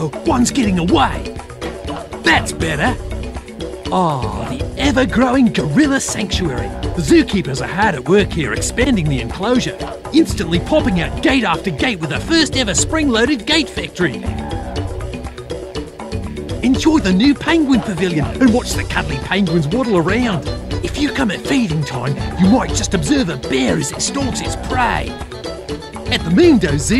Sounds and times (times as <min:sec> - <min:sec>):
Speech: 0:00.0 - 0:01.3, 0:02.2 - 0:03.0, 0:03.9 - 0:14.2, 0:16.6 - 0:25.2, 0:26.1 - 0:26.9
Music: 0:00.0 - 0:26.9.